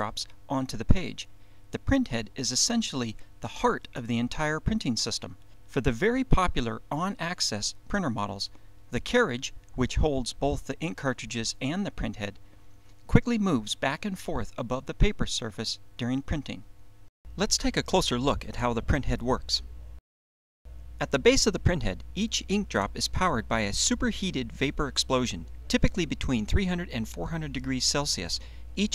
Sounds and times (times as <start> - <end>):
Speech: 0.0 - 12.4, 13.1 - 16.7, 17.4 - 19.7, 21.0 - 28.9.